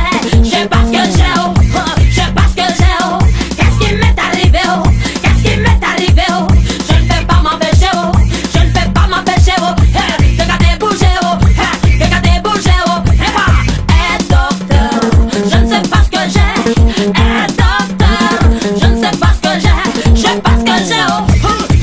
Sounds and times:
Pop music: 0.0 - 21.8.

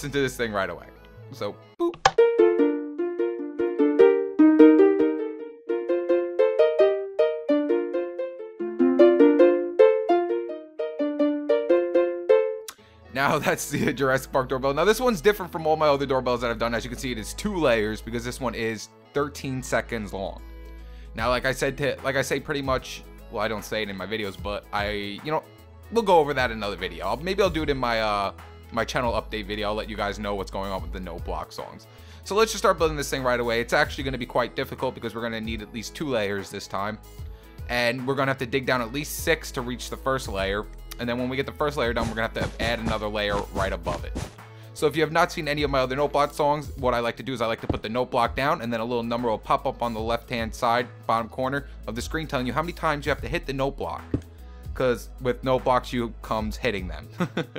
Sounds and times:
Speech: 0.0 - 2.0, 13.2 - 20.4, 21.2 - 37.0, 37.7 - 44.2, 44.8 - 54.1, 54.8 - 57.1
Music: 0.0 - 57.5.

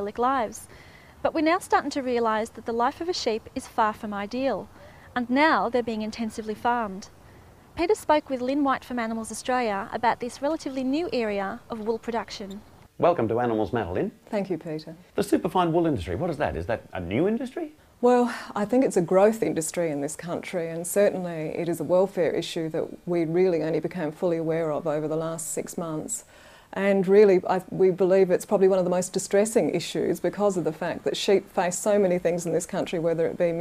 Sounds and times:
Speech: 7.8 - 26.2.

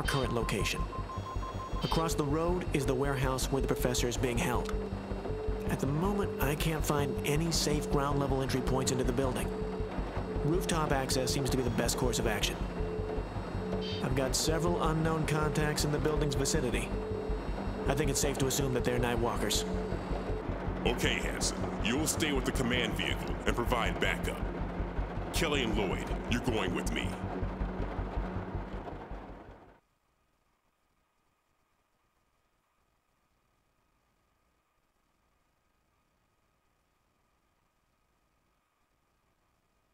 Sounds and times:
Speech: 0.0 - 0.9, 1.8 - 4.7, 5.7 - 9.5, 10.4 - 12.7, 14.0 - 16.9, 17.9 - 19.7, 20.9 - 24.4, 25.4 - 27.2
Music: 0.0 - 29.8.

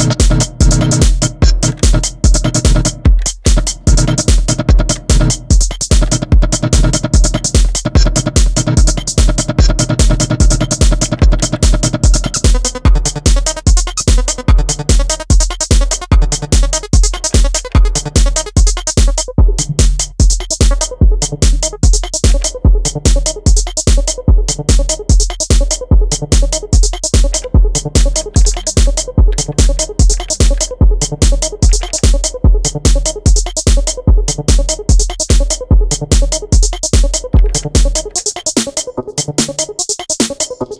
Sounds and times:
Drum machine: 0.0 - 40.7
Synthesizer: 0.0 - 40.7.

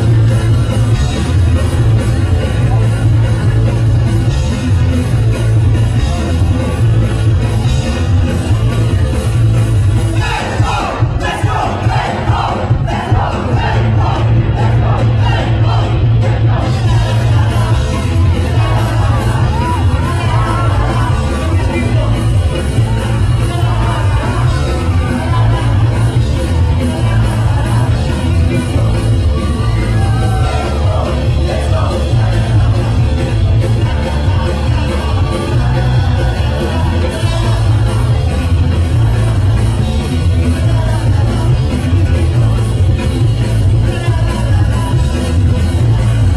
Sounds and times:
Blues: 0.0 - 46.3
Rhythm and blues: 0.0 - 46.3.

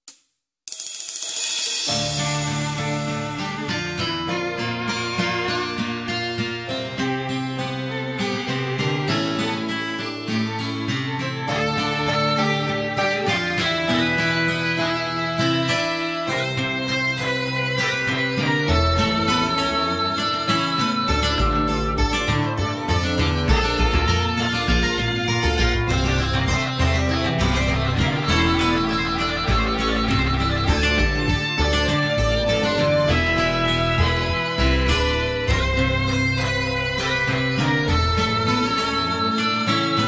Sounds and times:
Music: 0.7 - 40.0.

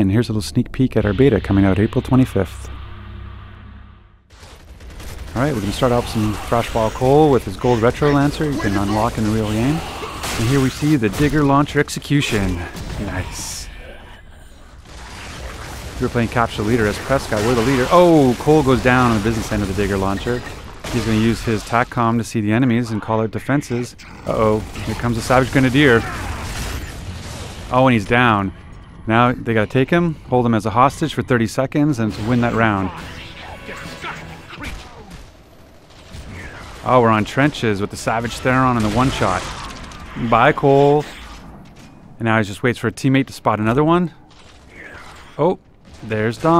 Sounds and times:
Speech: 0.0 - 2.7, 5.4 - 14.2, 16.0 - 26.3, 27.7 - 28.5, 29.1 - 35.1, 36.4 - 39.6, 40.2 - 41.2, 42.2 - 44.2, 44.8 - 46.6.

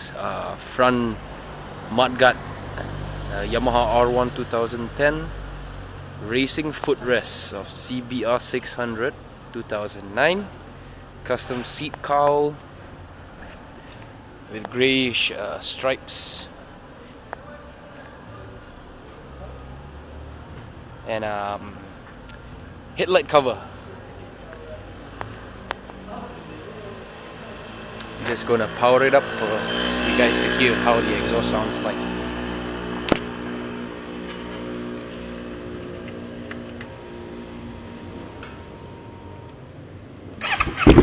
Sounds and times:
Speech: 0.0 - 1.2, 1.9 - 2.4, 3.3 - 5.4, 6.2 - 10.6, 11.2 - 12.6, 14.5 - 19.7, 21.0 - 21.9, 23.0 - 25.0, 26.0 - 32.1
Outside, urban or manmade: 0.0 - 41.0.

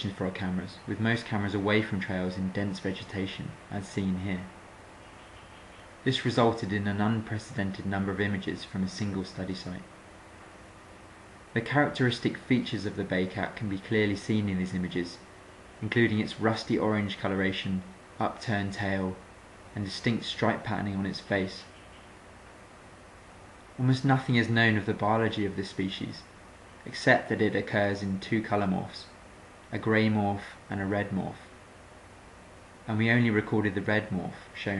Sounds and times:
Speech: 0.0 - 4.6, 6.0 - 9.9, 11.5 - 21.7, 23.8 - 31.5, 32.9 - 34.7.

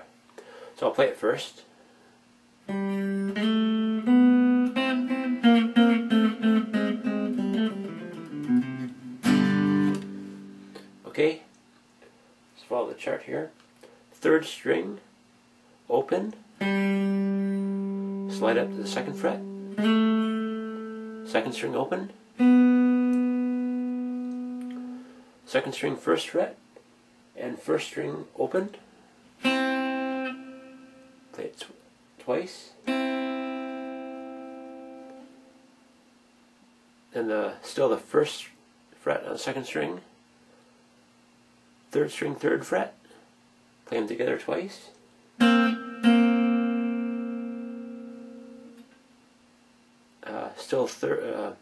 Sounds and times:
Speech: 0.8 - 1.7, 11.0 - 11.5, 12.6 - 15.1, 15.9 - 16.4, 18.3 - 19.4, 21.3 - 22.2, 25.5 - 26.6, 27.3 - 28.8, 31.3 - 32.8, 37.1 - 40.1, 41.9 - 43.1, 43.8 - 45.0, 50.2 - 51.6
Guitar: 2.6 - 12.8, 15.9 - 26.8, 27.4 - 35.9, 43.8 - 49.2.

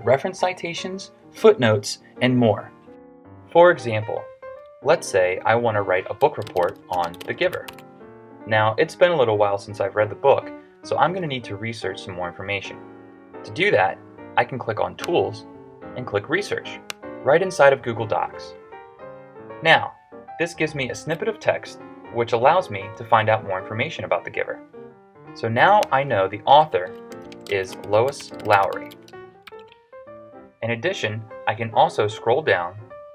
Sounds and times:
Speech: 0.0 - 2.7, 3.6 - 7.7, 8.5 - 12.8, 13.5 - 18.6, 19.6 - 24.6, 25.4 - 29.0, 30.6 - 32.8
Music: 0.0 - 33.1.

